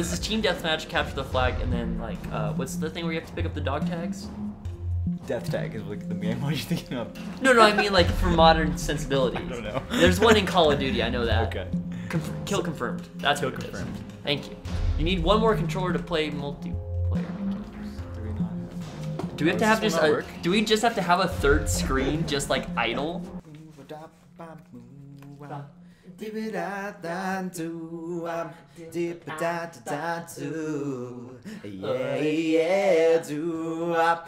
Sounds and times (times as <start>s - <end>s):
Speech: 0.0s - 4.3s, 5.2s - 16.6s, 19.4s - 23.2s, 28.8s - 30.2s
Music: 0.0s - 34.2s.